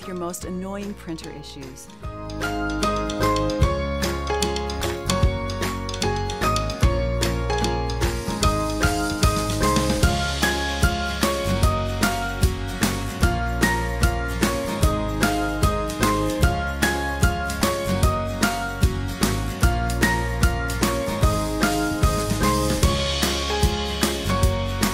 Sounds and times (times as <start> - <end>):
Music: 0.0 - 24.9.